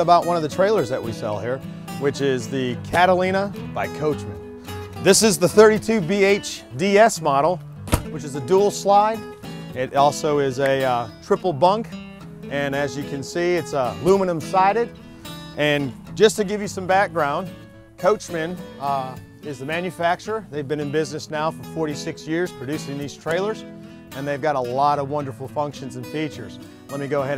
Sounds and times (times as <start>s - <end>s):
Speech: 0.0s - 4.4s, 5.0s - 9.2s, 9.8s - 11.9s, 12.5s - 14.9s, 15.6s - 23.6s, 24.2s - 27.3s
Music: 0.0s - 27.3s.